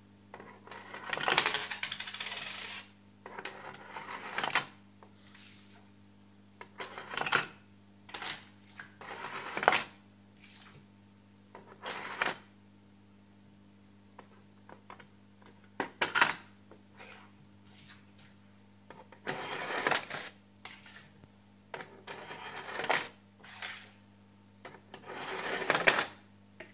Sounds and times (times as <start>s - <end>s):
Coin (dropping): 0.7s - 2.9s, 3.8s - 4.8s, 8.1s - 10.0s, 19.2s - 20.4s, 22.1s - 23.2s, 25.0s - 26.2s.